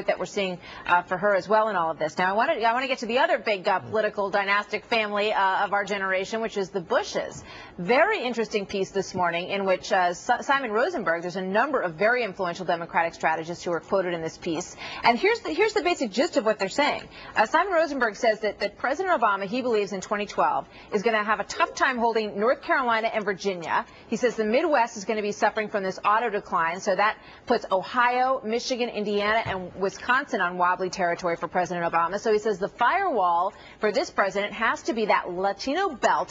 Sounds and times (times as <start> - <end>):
Speech: 0.0 - 36.3.